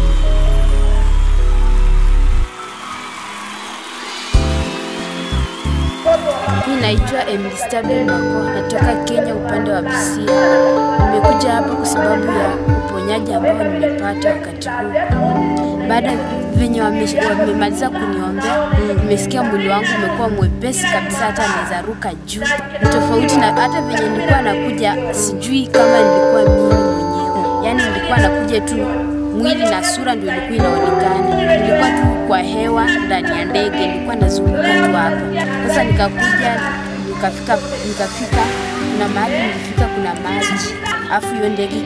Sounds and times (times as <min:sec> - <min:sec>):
Music: 0:00.0 - 0:41.8
Speech: 0:06.1 - 0:41.8.